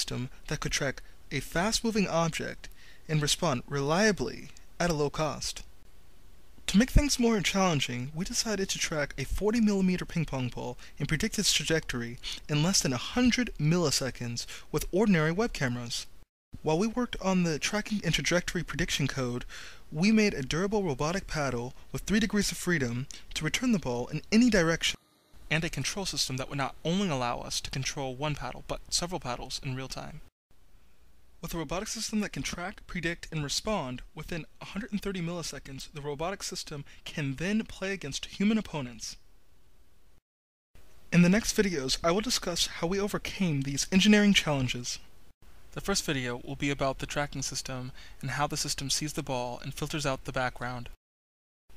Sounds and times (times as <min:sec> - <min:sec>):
Speech: 0:00.0 - 0:05.7, 0:06.7 - 0:30.3, 0:31.4 - 0:39.2, 0:41.1 - 0:45.1, 0:45.8 - 0:51.0.